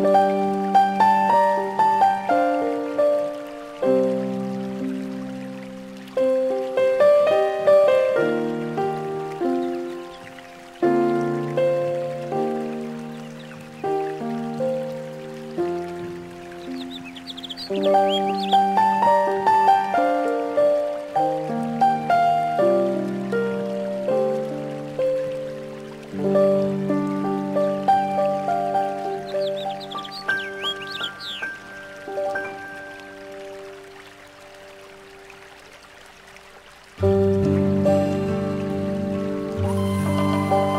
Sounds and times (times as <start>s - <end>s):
Music: 0.0s - 35.3s, 37.0s - 40.7s.